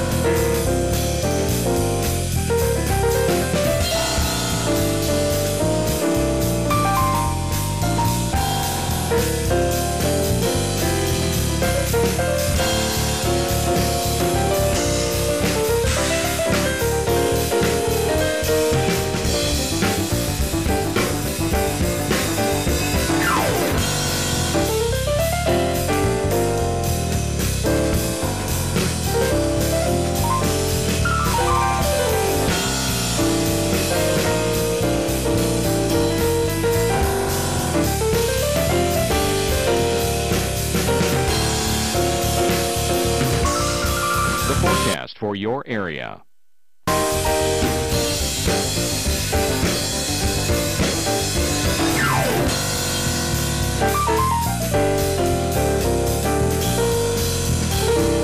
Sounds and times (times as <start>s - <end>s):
Music: 0.0s - 45.1s, 46.9s - 58.2s.